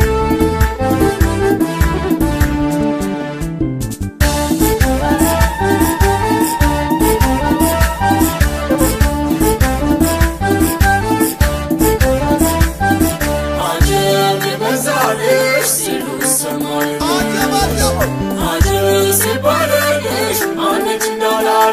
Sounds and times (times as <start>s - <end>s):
Traditional music: 0.0s - 3.5s, 4.2s - 20.2s.